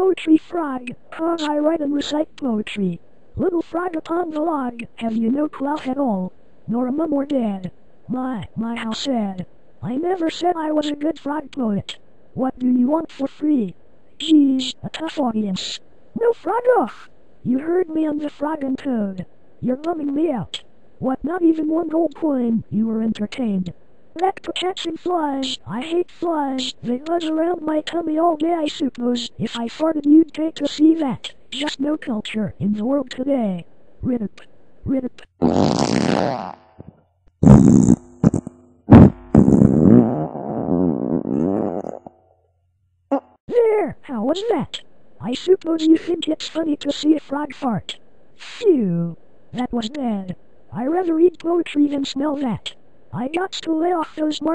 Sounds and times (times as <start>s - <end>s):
Speech: 0.0s - 35.3s, 43.5s - 54.5s.